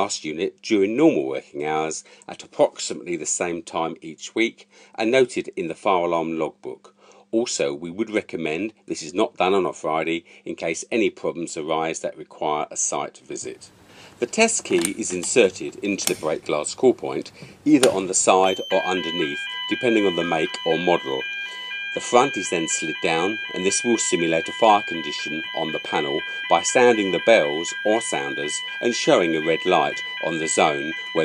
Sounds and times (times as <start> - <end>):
Speech: 0.0 - 21.2, 22.0 - 31.2
Buzzer: 17.8 - 31.2.